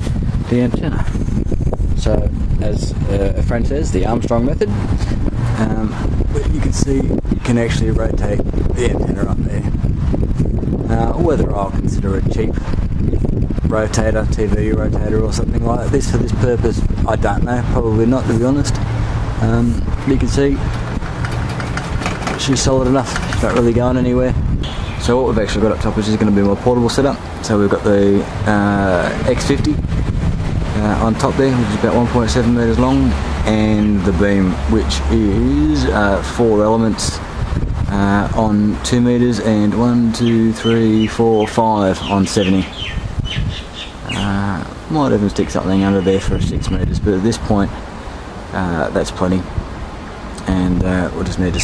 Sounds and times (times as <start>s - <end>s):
Speech: 0.5s - 1.1s, 2.0s - 4.8s, 5.6s - 9.7s, 10.8s - 12.6s, 13.6s - 18.8s, 19.4s - 20.6s, 22.3s - 24.4s, 25.0s - 29.8s, 30.7s - 37.2s, 37.9s - 42.7s, 44.1s - 47.7s, 48.5s - 49.5s, 50.4s - 51.6s
Chirp, tweet: 40.2s - 44.2s.